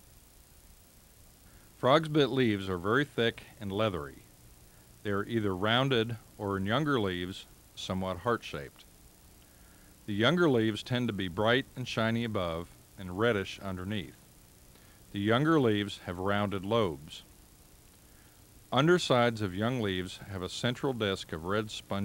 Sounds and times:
Speech: 1.8 - 4.3, 5.0 - 8.9, 10.1 - 14.2, 15.1 - 17.3, 18.7 - 22.0.

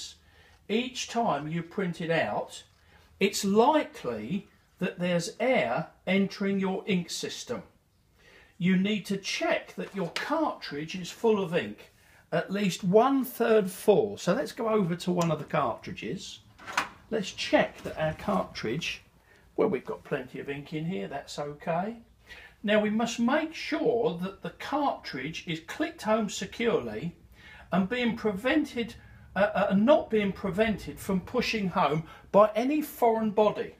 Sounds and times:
Speech: 0.0 - 7.7, 8.6 - 16.5, 17.1 - 33.7.

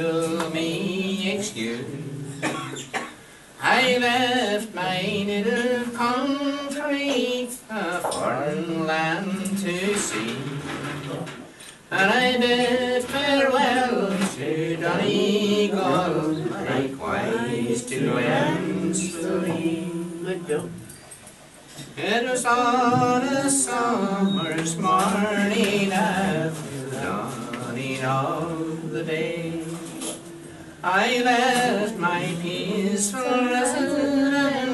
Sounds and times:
Male singing: 0.0 - 2.6, 3.6 - 20.8, 22.0 - 34.7
Female singing: 12.0 - 20.6, 30.9 - 34.7.

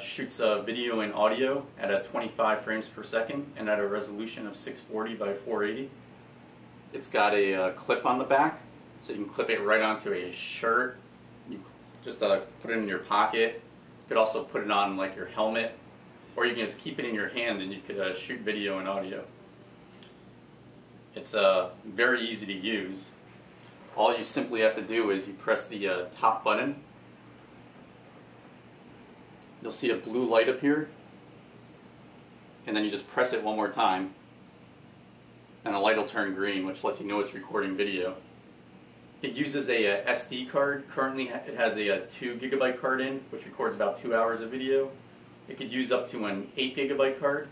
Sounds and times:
Speech: 0.0 - 6.0, 6.9 - 15.8, 16.4 - 19.3, 21.1 - 23.2, 23.9 - 26.9, 29.6 - 31.0, 32.6 - 34.2, 35.6 - 38.3, 39.2 - 47.5.

